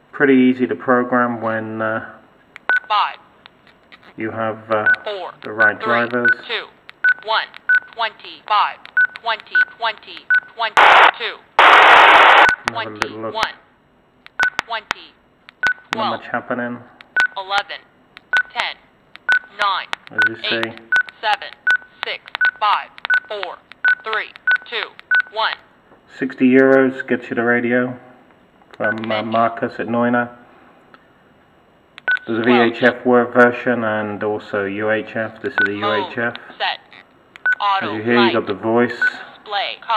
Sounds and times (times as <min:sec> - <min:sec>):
Speech: 0:04.2 - 0:11.4, 0:14.7 - 0:15.2, 0:19.5 - 0:28.0, 0:28.8 - 0:30.4, 0:32.3 - 0:36.8, 0:37.6 - 0:39.9.